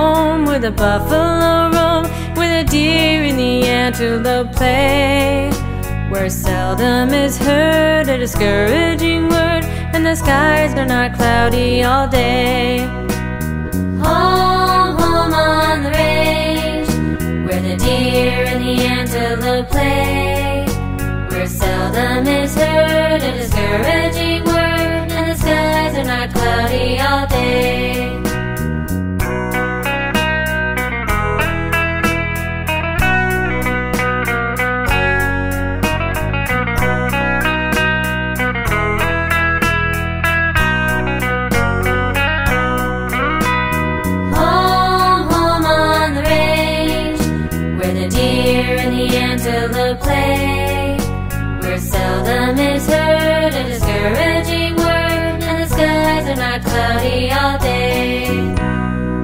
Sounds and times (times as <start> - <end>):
Music for children: 1.9 - 34.3, 34.9 - 59.2.